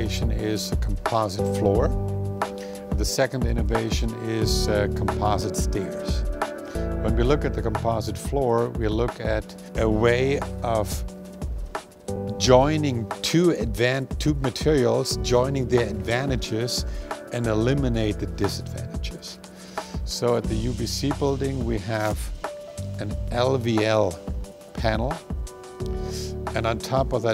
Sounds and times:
Speech: 0:00.0 - 0:02.0, 0:03.0 - 0:06.2, 0:07.0 - 0:11.1, 0:12.3 - 0:19.4, 0:20.1 - 0:22.4, 0:23.0 - 0:25.2, 0:26.2 - 0:27.3
Music: 0:00.0 - 0:27.3.

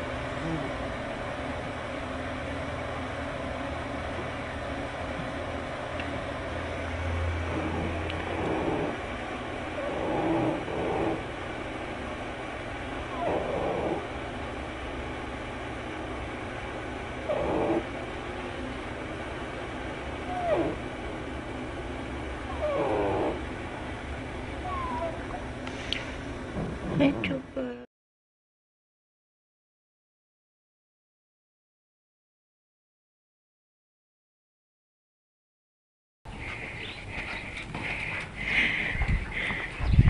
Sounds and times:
Whimper (dog): 0:13.1 - 0:13.8, 0:20.3 - 0:20.8, 0:22.5 - 0:23.0, 0:24.6 - 0:25.3.

